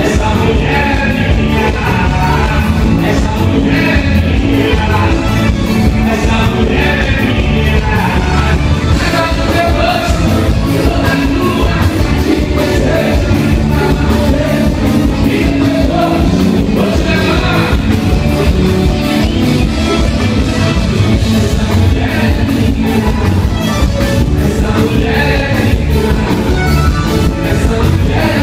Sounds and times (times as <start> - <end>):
Music: 0.0 - 28.4.